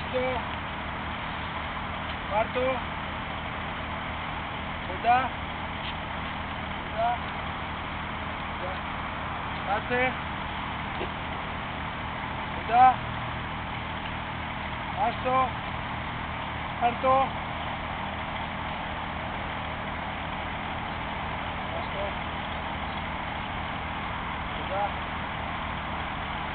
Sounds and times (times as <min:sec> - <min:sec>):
Speech: 0:00.0 - 0:00.5, 0:02.3 - 0:02.9, 0:04.9 - 0:05.4, 0:06.9 - 0:07.3, 0:08.6 - 0:08.9, 0:09.7 - 0:10.2, 0:12.6 - 0:13.0, 0:15.0 - 0:15.6, 0:16.8 - 0:17.4, 0:21.7 - 0:22.2, 0:24.6 - 0:25.0.